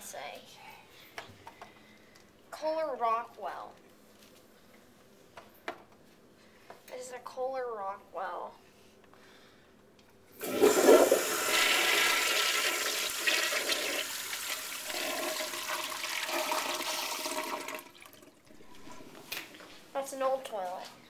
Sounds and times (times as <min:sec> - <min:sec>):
Toilet flush: 0:10.4 - 0:19.2
Water: 0:17.6 - 0:19.2.